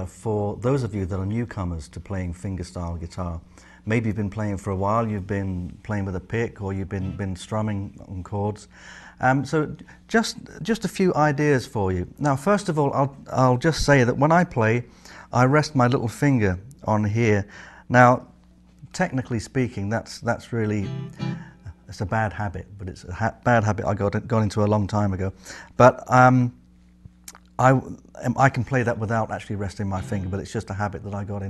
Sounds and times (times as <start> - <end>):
Speech: 0.0 - 21.0, 21.7 - 26.6, 27.3 - 31.5
Acoustic guitar: 20.8 - 21.6.